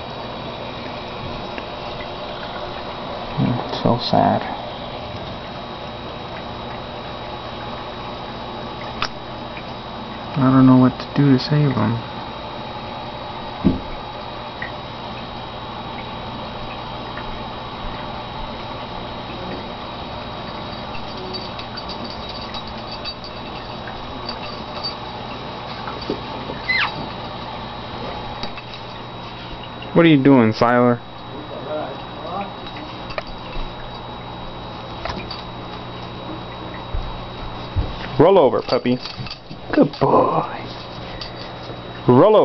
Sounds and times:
Speech: 0:03.4 - 0:04.6, 0:10.4 - 0:12.1, 0:30.0 - 0:32.6, 0:38.2 - 0:39.0, 0:42.1 - 0:42.4.

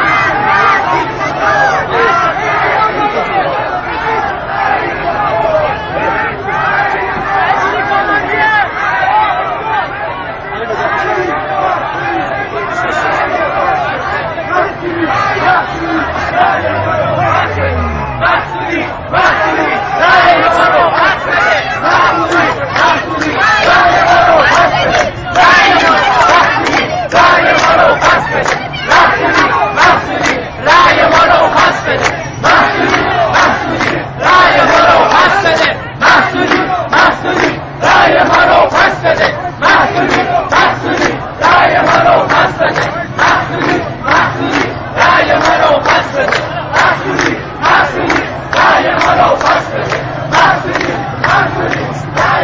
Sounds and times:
Speech: 0:00.0 - 0:33.2.

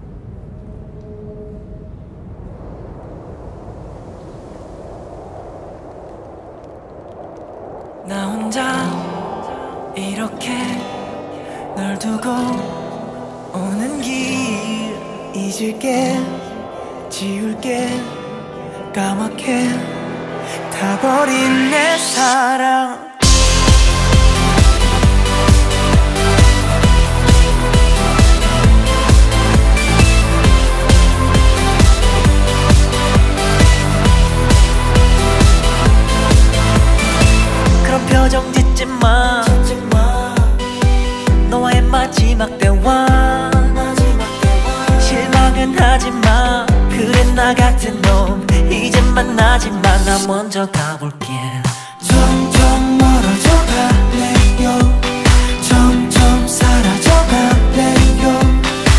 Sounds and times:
Music: 0:10.0 - 0:58.9.

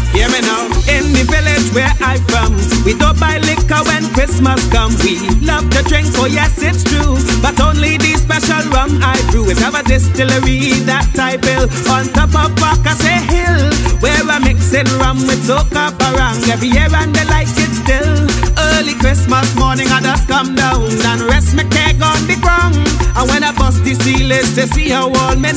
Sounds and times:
Funny music: 0:00.0 - 0:25.5.

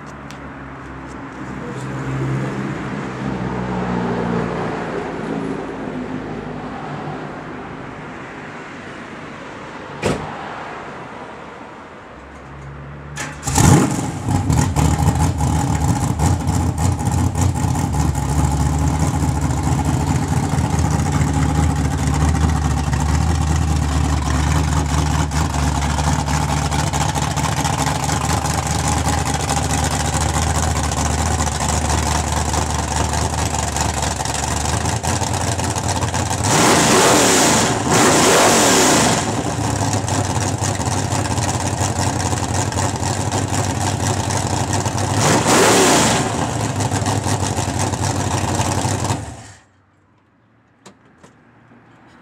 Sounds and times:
Car: 0:00.0 - 0:52.2.

